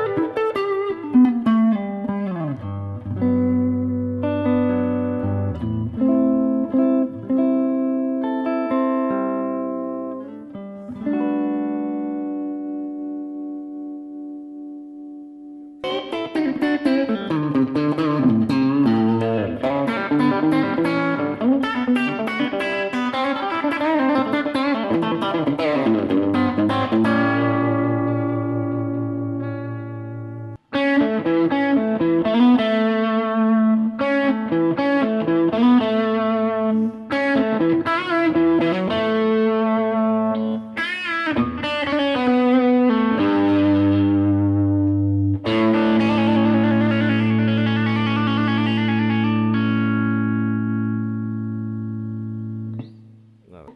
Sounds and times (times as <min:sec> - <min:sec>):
Guitar: 0:00.0 - 0:53.7
Inside, small room: 0:00.0 - 0:53.7.